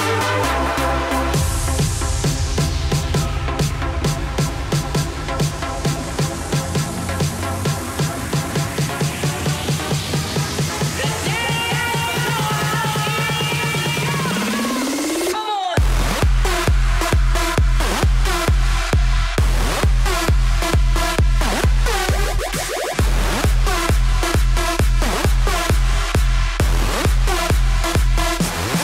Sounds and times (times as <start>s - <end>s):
Song: 0.0s - 27.5s
Electronic dance music: 0.0s - 28.8s
House music: 0.0s - 28.8s.